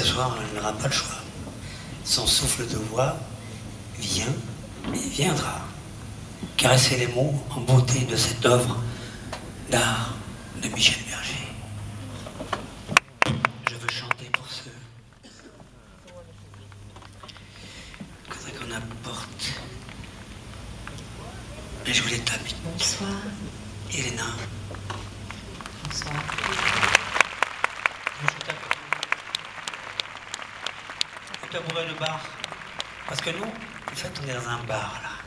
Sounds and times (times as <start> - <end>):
Speech: 0.0 - 1.4, 2.1 - 3.3, 4.0 - 5.8, 6.6 - 8.9, 13.7 - 14.9, 18.3 - 19.8, 21.2 - 24.5, 25.7 - 26.9, 28.2 - 29.1, 31.4 - 32.4, 33.1 - 35.2.